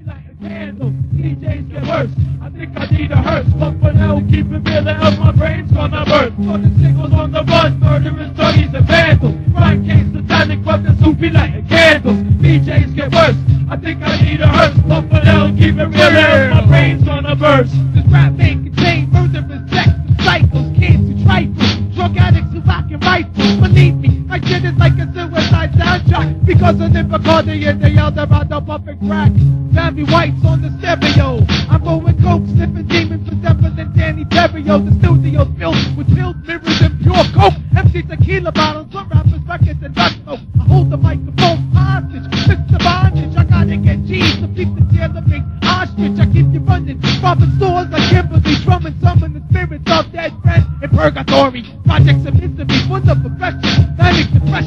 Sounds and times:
Music: 0.0 - 54.6.

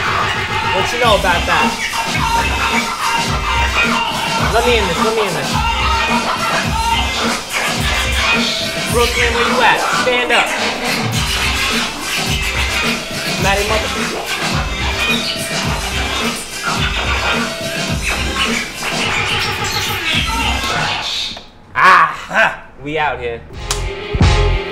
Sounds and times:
Scratching (performance technique): 0.0 - 21.4
Speech: 0.8 - 1.7, 4.4 - 5.6, 13.4 - 14.0.

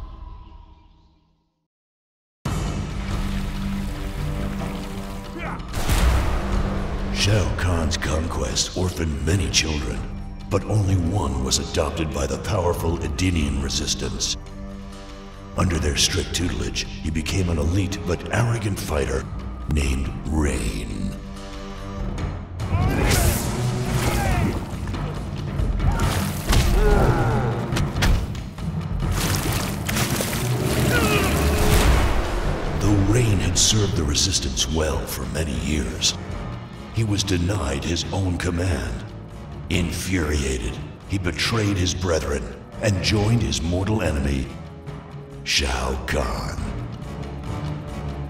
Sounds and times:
Music: 2.4 - 48.3
Speech: 7.2 - 14.4, 15.6 - 21.2, 32.8 - 36.2, 37.0 - 39.1, 39.7 - 44.6, 45.4 - 46.8.

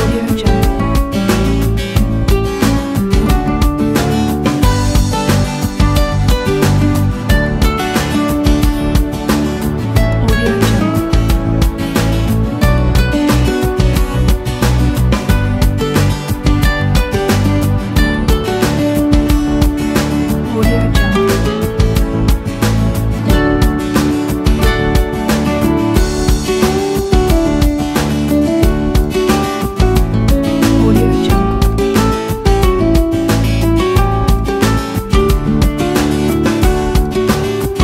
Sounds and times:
Speech: 0.0 - 1.4, 10.1 - 11.1, 20.5 - 21.5, 30.8 - 31.6
Music: 0.0 - 37.8.

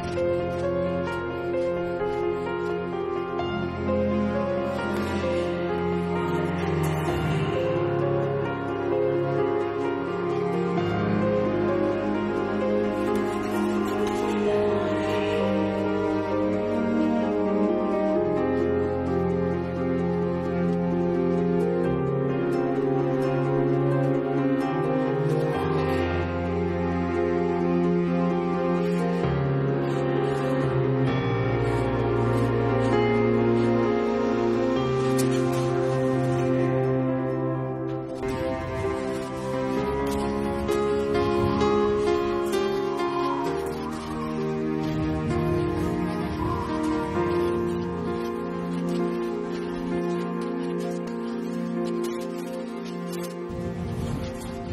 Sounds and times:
Music: 0.0 - 54.7.

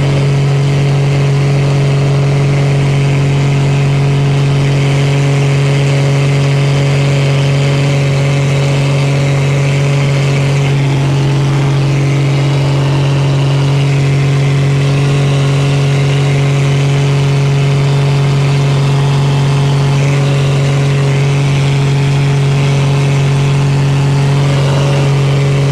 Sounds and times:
Aircraft: 0.0 - 25.7
Outside, rural or natural: 0.0 - 25.7.

